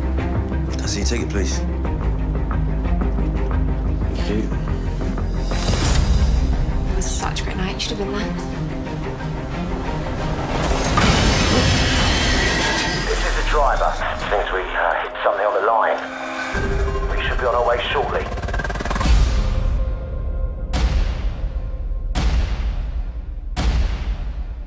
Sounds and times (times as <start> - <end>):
Music: 0.0 - 24.6
Speech: 17.1 - 18.3.